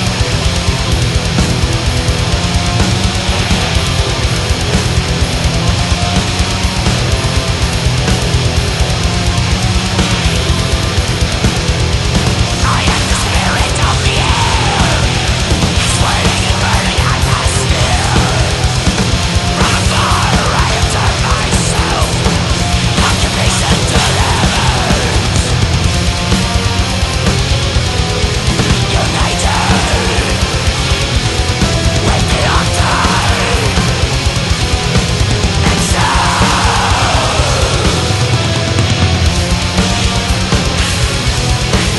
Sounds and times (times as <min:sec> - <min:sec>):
Heavy metal: 0:00.0 - 0:41.9.